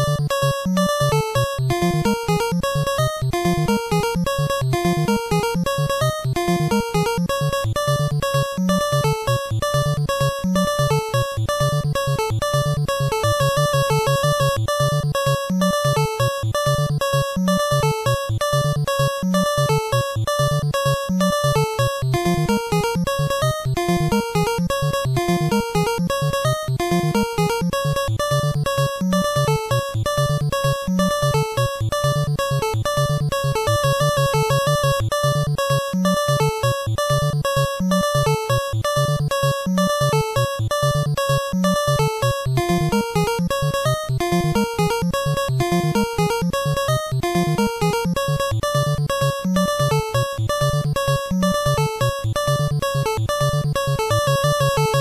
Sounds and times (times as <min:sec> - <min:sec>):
Funny music: 0:00.0 - 0:55.0.